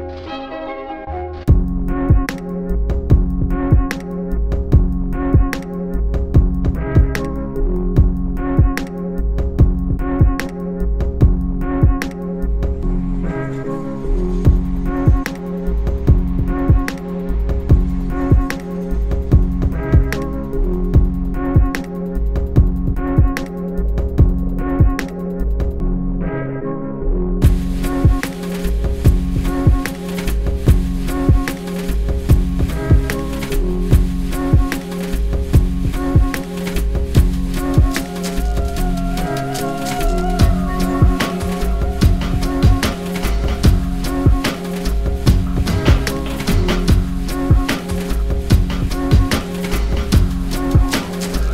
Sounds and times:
Music: 0.0s - 51.5s.

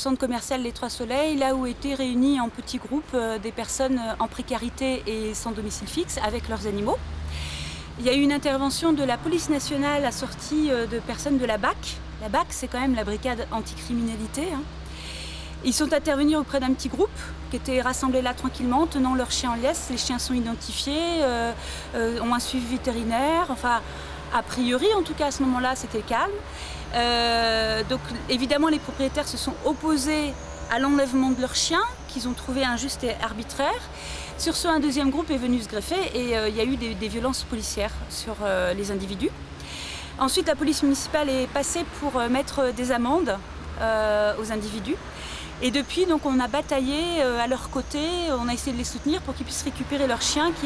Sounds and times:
Speech: 0.0s - 7.0s, 8.0s - 14.7s, 15.6s - 39.4s, 40.2s - 45.0s, 45.6s - 50.6s.

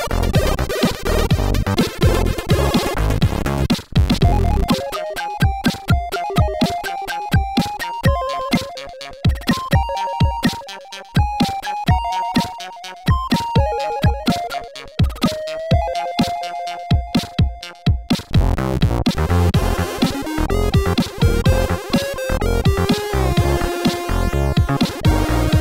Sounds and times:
Video game music: 0.0s - 25.6s.

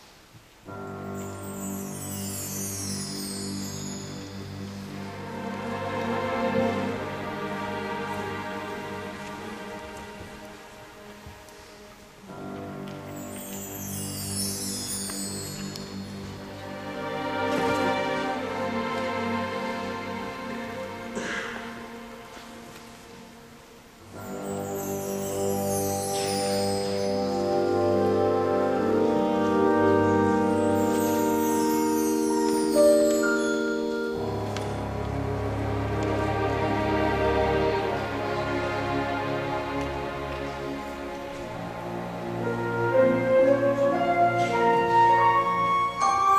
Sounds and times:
Orchestra: 0.0s - 46.3s.

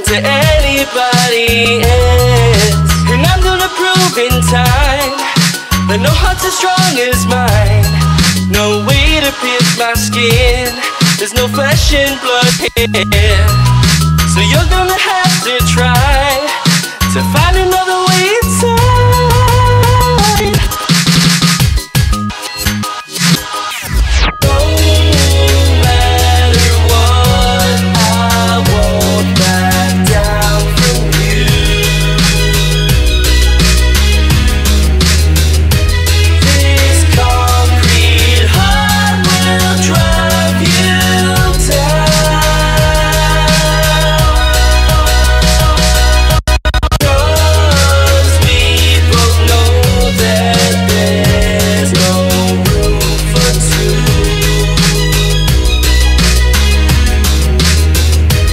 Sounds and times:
Music: 0.0s - 58.5s.

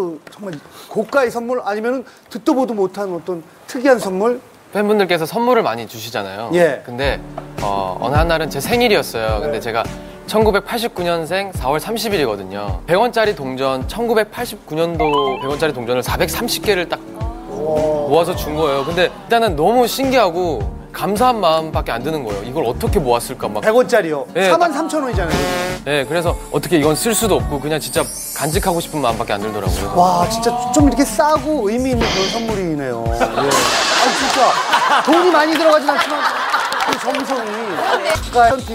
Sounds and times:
Speech: 0.0s - 36.3s, 36.9s - 38.7s
Music: 6.5s - 35.6s, 37.1s - 38.7s.

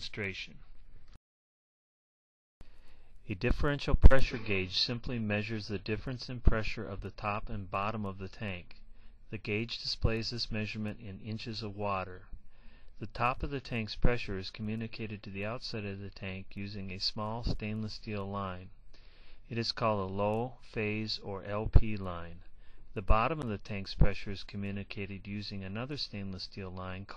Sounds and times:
Speech: 0.0s - 0.6s, 3.3s - 12.3s, 13.0s - 18.8s, 19.5s - 27.1s.

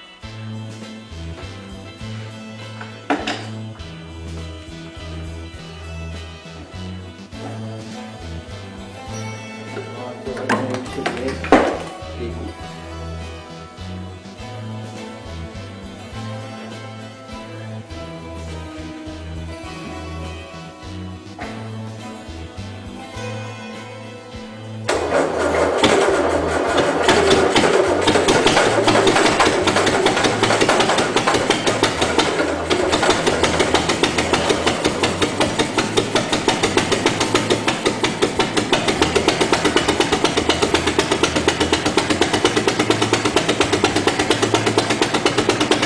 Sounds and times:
Music: 0.0s - 45.8s
Engine: 24.9s - 45.8s.

